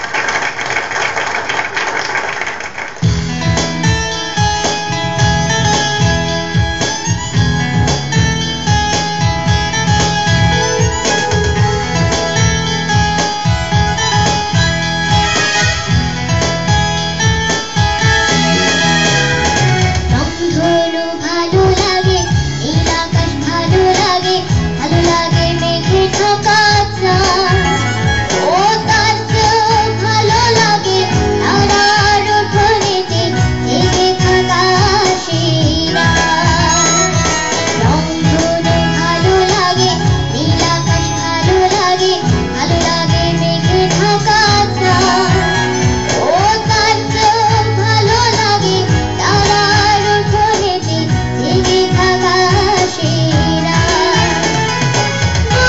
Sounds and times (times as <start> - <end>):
Music: 3.0 - 55.6
Child singing: 20.1 - 54.7, 55.4 - 55.6.